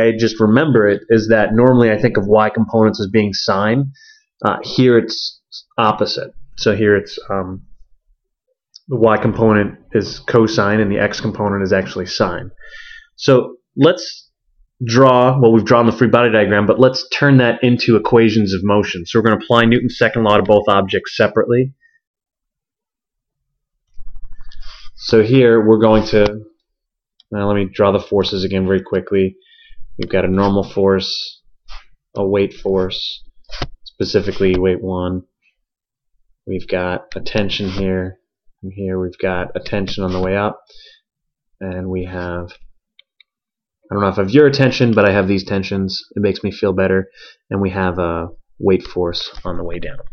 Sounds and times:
Speech: 0.0 - 7.7, 8.8 - 12.6, 13.2 - 21.8, 25.0 - 26.5, 27.3 - 29.4, 30.0 - 31.4, 32.2 - 33.2, 33.9 - 35.3, 36.5 - 40.7, 41.6 - 42.6, 43.9 - 50.1.

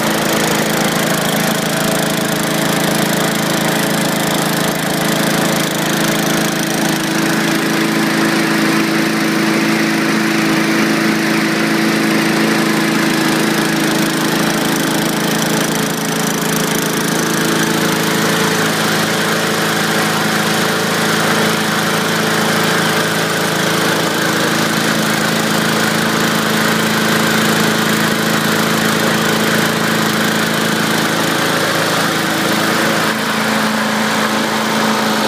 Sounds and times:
Engine: 0.0 - 35.2.

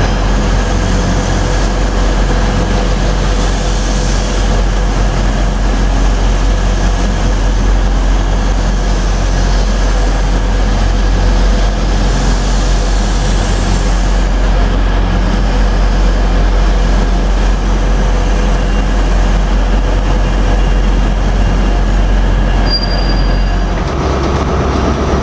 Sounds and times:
Railroad car, train wagon: 0.0 - 25.2
Train: 0.0 - 25.2.

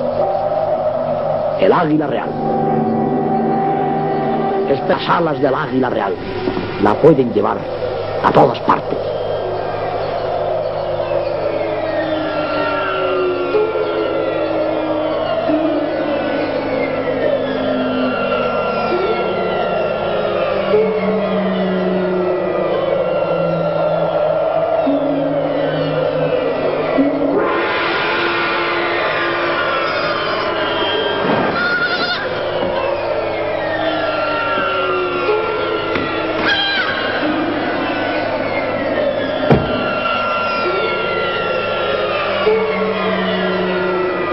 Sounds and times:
Music: 0.0 - 44.3.

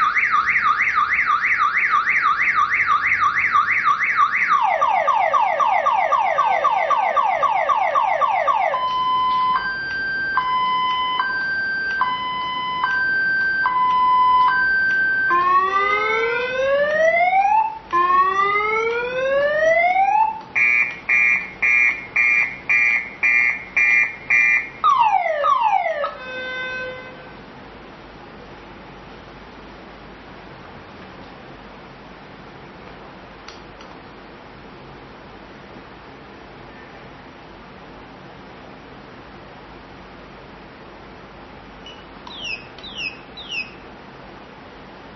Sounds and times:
Car alarm: 0.0 - 16.8, 20.6 - 26.9, 41.9 - 43.8
Ambulance (siren): 0.0 - 27.0.

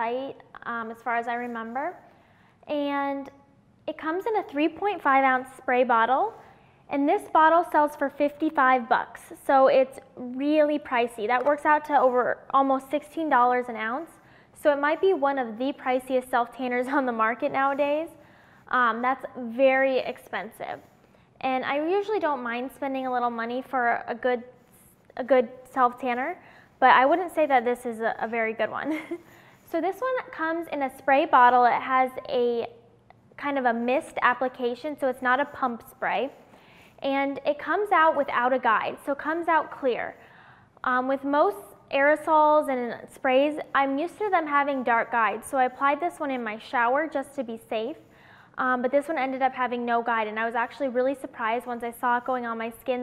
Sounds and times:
Speech: 0.0 - 2.0, 2.7 - 24.5, 25.2 - 29.1, 29.7 - 32.8, 33.4 - 36.4, 37.0 - 40.2, 40.8 - 48.0, 48.6 - 53.0.

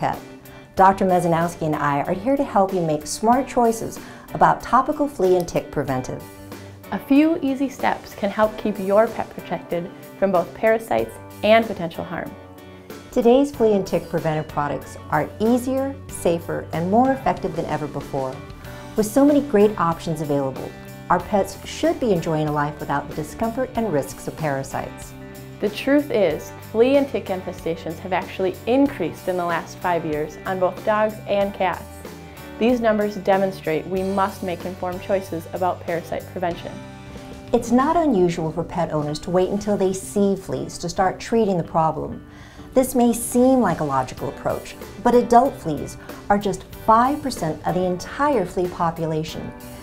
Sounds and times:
Speech: 0.0 - 0.2, 0.8 - 6.3, 6.9 - 12.4, 13.2 - 18.4, 19.0 - 32.0, 32.6 - 36.8, 37.6 - 42.2, 42.8 - 49.5
Music: 0.0 - 49.8.

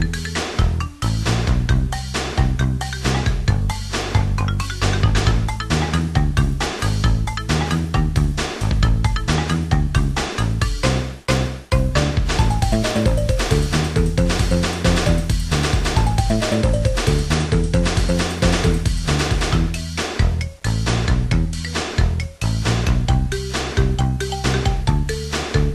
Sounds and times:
Music: 0.0 - 25.7.

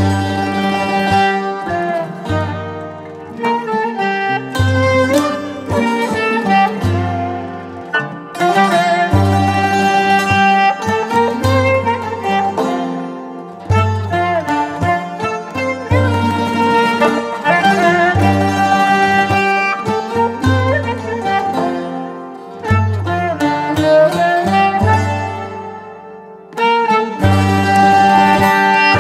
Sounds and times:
Pizzicato: 13.6 - 21.9.

